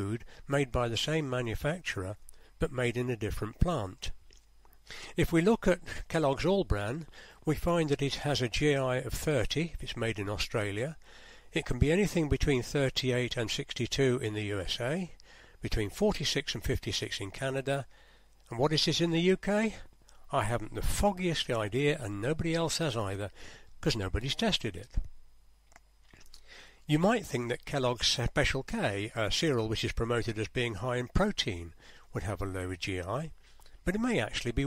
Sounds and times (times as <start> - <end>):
Speech: 0.0 - 4.2, 5.1 - 17.9, 18.5 - 25.1, 26.9 - 34.6.